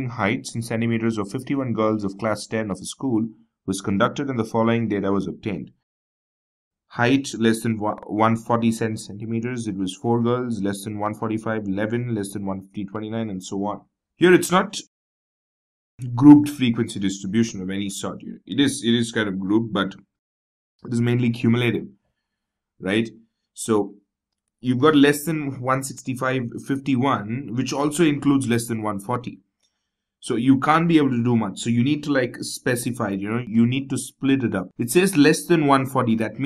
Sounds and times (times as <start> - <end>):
Speech synthesizer: 0.0 - 5.7, 7.0 - 14.9, 16.0 - 20.0, 20.9 - 21.9, 22.8 - 23.9, 24.7 - 29.3, 30.2 - 36.4.